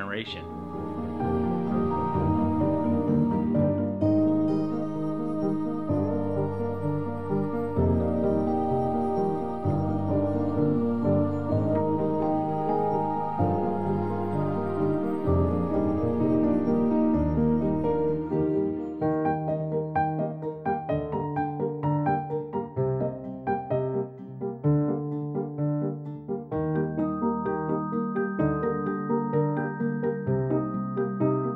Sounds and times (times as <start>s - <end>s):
Electric piano: 0.0s - 31.5s.